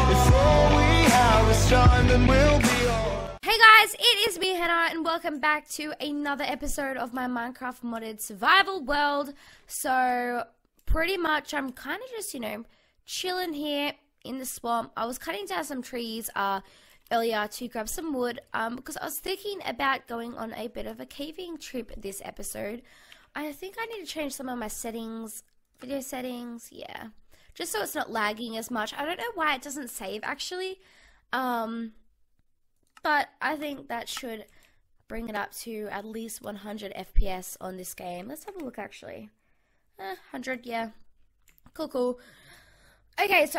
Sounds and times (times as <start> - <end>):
Speech: 3.4 - 22.8, 23.4 - 30.8, 31.4 - 32.0, 33.0 - 34.5, 35.1 - 39.3, 40.0 - 41.0, 41.8 - 42.2, 43.2 - 43.5.